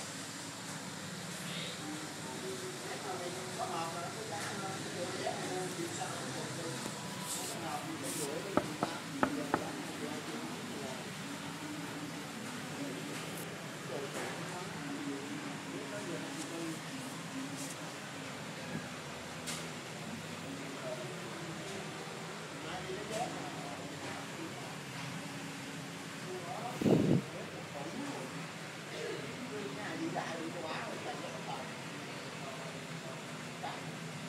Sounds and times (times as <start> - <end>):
Speech: 1.4 - 34.2.